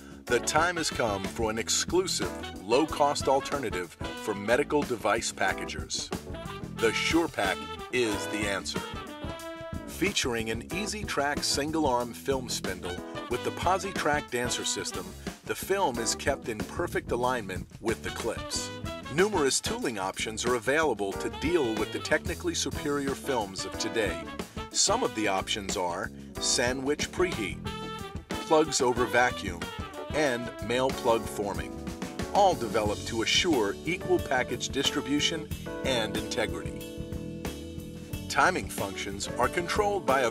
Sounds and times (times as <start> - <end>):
Music: 0.0 - 40.3
Speech: 0.3 - 6.1, 6.8 - 8.9, 9.9 - 27.6, 28.4 - 31.7, 32.4 - 36.8, 38.3 - 40.3.